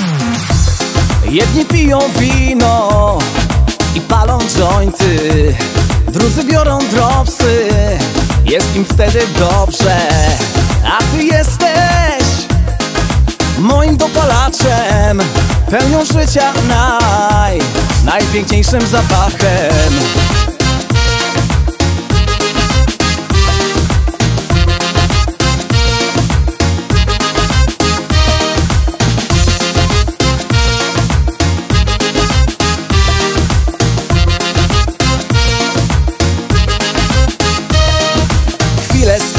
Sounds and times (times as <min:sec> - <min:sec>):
Music: 0:00.0 - 0:39.3.